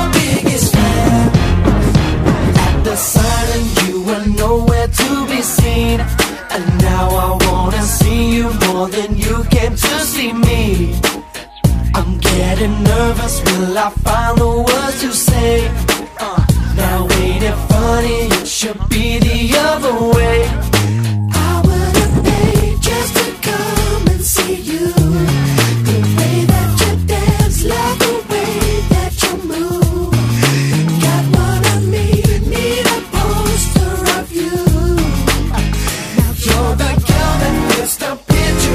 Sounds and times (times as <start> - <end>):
Rhythm and blues: 0.0 - 38.7.